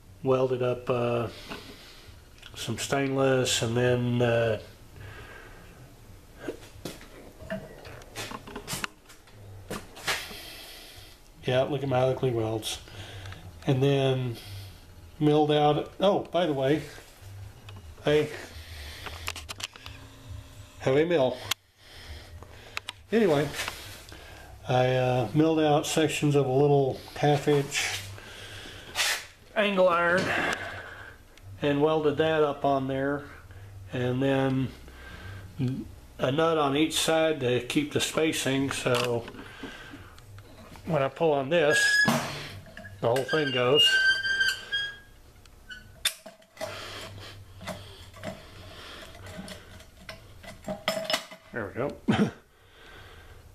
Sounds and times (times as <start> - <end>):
Speech: 0.2 - 1.4, 2.5 - 4.7, 11.4 - 12.8, 13.6 - 14.4, 15.2 - 17.0, 20.8 - 21.4, 23.1 - 23.6, 24.7 - 28.1, 29.6 - 30.4, 31.6 - 33.3, 33.9 - 34.8, 35.6 - 39.3, 40.8 - 41.9, 43.0 - 44.0, 51.5 - 52.0.